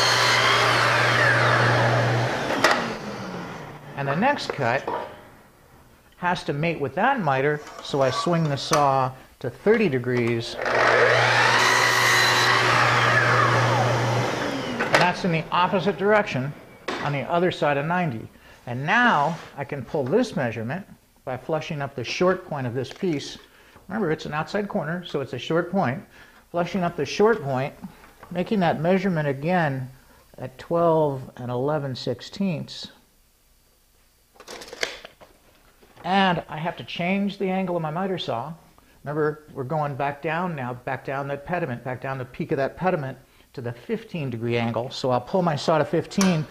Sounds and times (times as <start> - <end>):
Power tool: 0.0 - 4.0, 10.6 - 17.0.